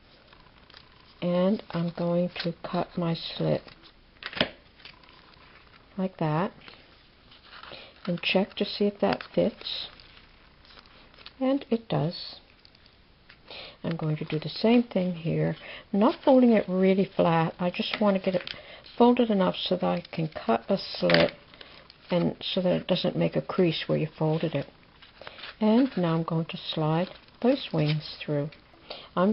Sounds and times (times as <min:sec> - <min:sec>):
Inside, small room: 0:00.0 - 0:29.3
Speech: 0:01.2 - 0:03.7, 0:08.1 - 0:10.0, 0:11.4 - 0:12.4, 0:13.8 - 0:18.4, 0:19.0 - 0:21.4, 0:22.1 - 0:24.7, 0:25.6 - 0:28.6.